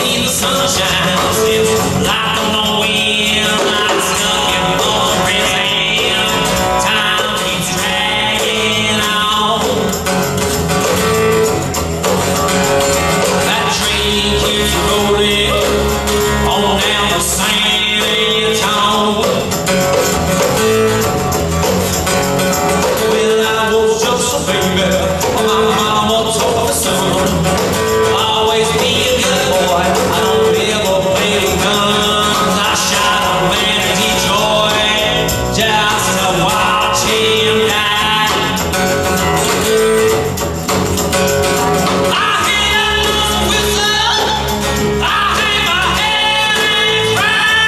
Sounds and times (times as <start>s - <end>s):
Blues: 0.0s - 47.6s.